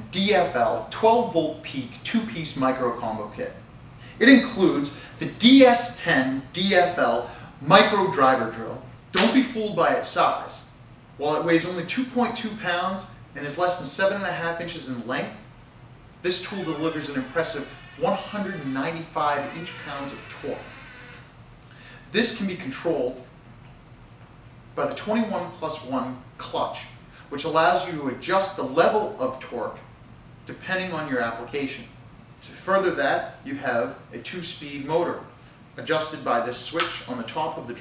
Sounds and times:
Speech: 0.0s - 3.6s, 4.2s - 15.4s, 16.2s - 20.7s, 22.1s - 23.2s, 24.8s - 29.9s, 30.5s - 37.8s.

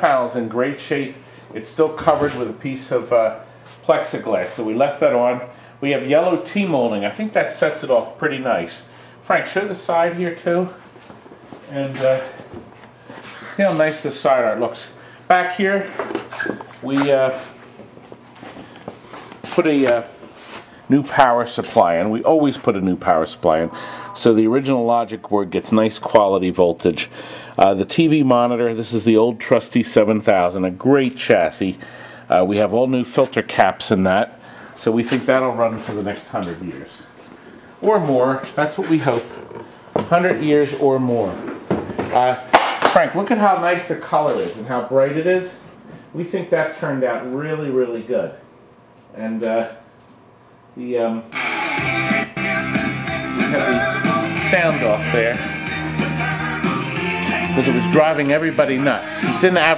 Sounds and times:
Speech: 0.0s - 10.8s, 11.6s - 12.4s, 13.5s - 16.1s, 16.8s - 17.5s, 19.4s - 20.2s, 20.9s - 37.1s, 37.8s - 41.4s, 42.1s - 48.4s, 49.1s - 49.8s, 50.8s - 51.4s, 54.4s - 55.5s, 57.6s - 59.7s.

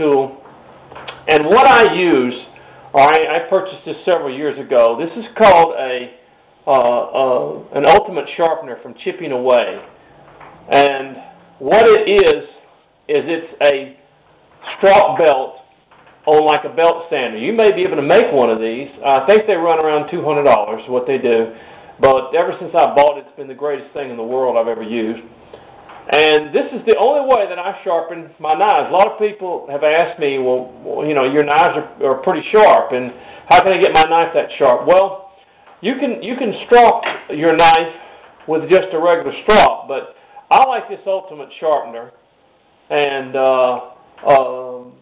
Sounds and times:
Speech: 0.0s - 0.4s, 1.1s - 9.9s, 10.7s - 14.0s, 14.6s - 15.7s, 16.3s - 25.3s, 26.1s - 42.2s, 42.9s - 45.0s.

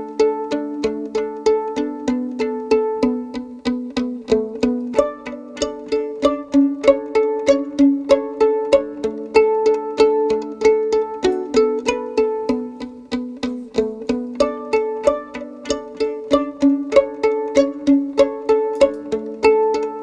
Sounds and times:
Pizzicato: 0.0s - 20.0s.

